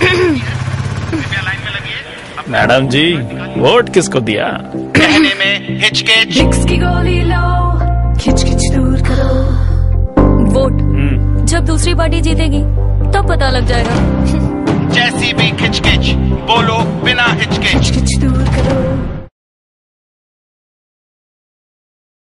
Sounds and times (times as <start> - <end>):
Music: 2.6 - 19.3.